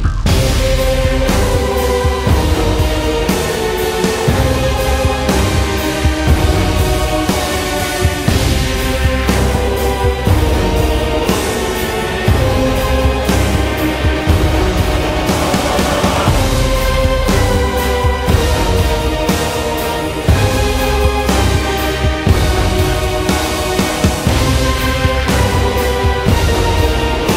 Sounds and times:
Theme music: 0.3 - 27.3.

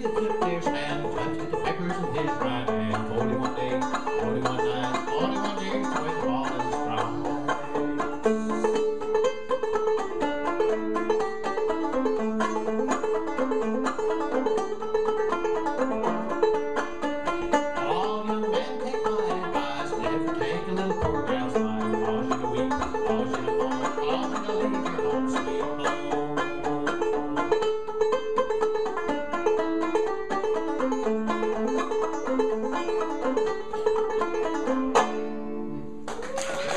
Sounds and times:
Banjo: 0.0 - 36.7.

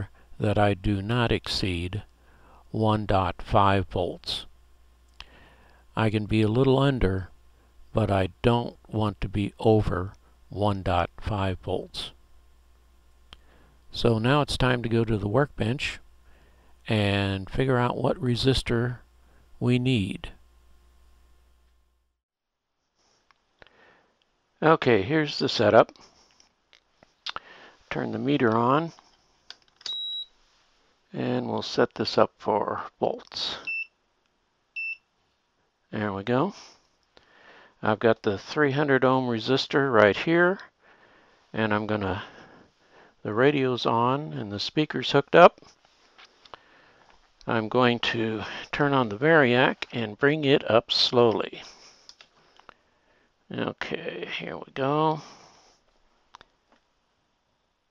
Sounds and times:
Speech: 0.0 - 2.1, 2.7 - 4.5, 6.0 - 7.3, 7.9 - 12.2, 13.9 - 16.0, 16.9 - 19.0, 19.6 - 20.4, 24.6 - 26.0, 27.9 - 29.0, 31.1 - 33.7, 35.9 - 36.6, 37.8 - 40.7, 41.5 - 42.3, 43.2 - 45.6, 47.4 - 51.7, 53.5 - 55.3.

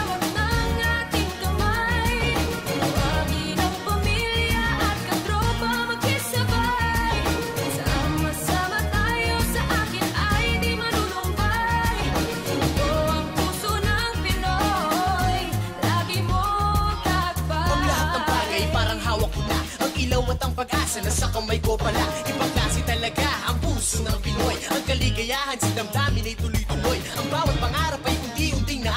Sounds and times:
Dance music: 0.0 - 28.9.

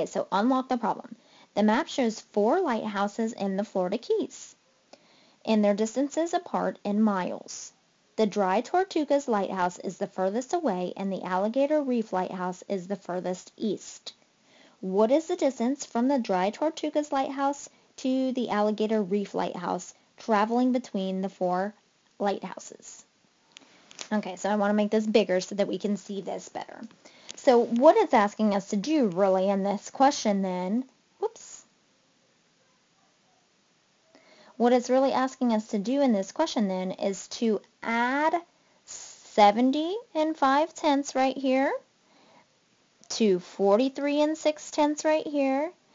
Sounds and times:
Speech: 0.0 - 4.6, 5.5 - 14.2, 14.8 - 23.1, 24.1 - 31.7, 34.6 - 41.9, 43.1 - 45.8.

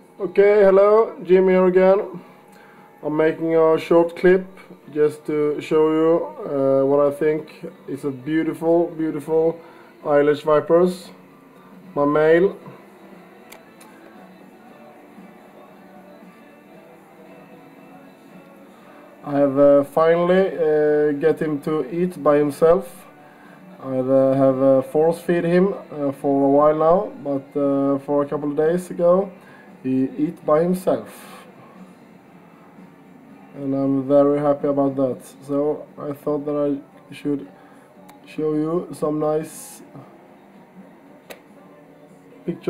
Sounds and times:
Speech: 0.2 - 2.3, 3.0 - 11.3, 12.0 - 12.8, 19.2 - 23.1, 23.8 - 31.5, 33.6 - 37.5, 38.1 - 40.1, 42.4 - 42.7.

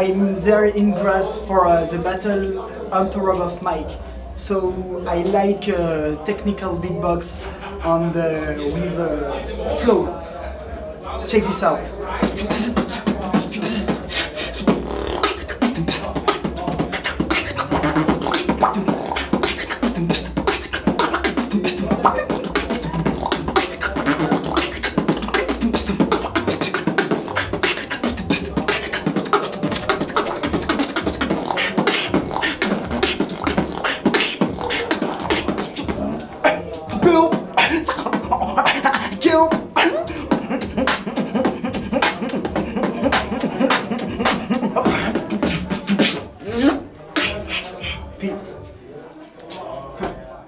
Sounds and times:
Beatboxing: 3.0 - 9.0, 11.3 - 48.6.

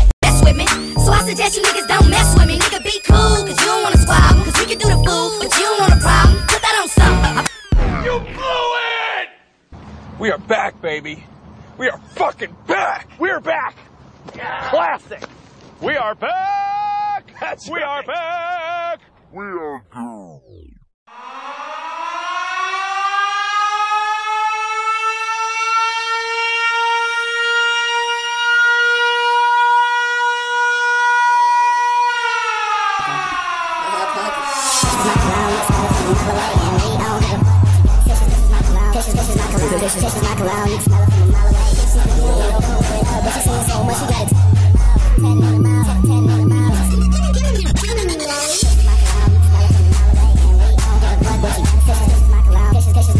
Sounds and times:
Music: 0.2 - 7.8, 34.8 - 53.1
Siren: 0.3 - 7.9, 20.5 - 53.1.

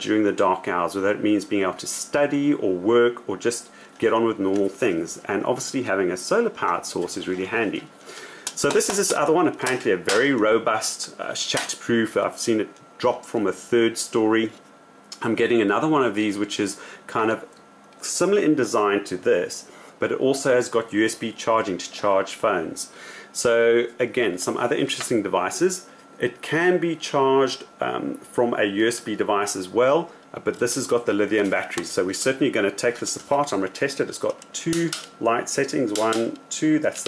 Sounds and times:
Speech: 0.0 - 7.9, 8.6 - 14.6, 15.2 - 37.0.

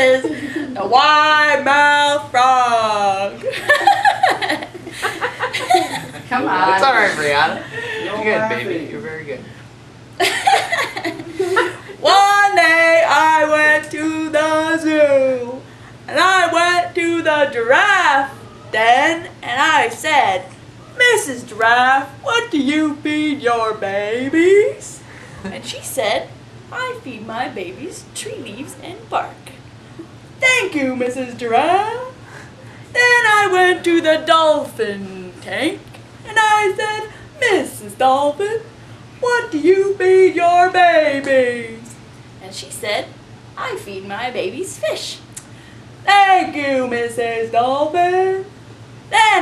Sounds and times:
Speech: 12.0 - 29.6, 33.0 - 45.3, 46.1 - 48.5, 49.1 - 49.4.

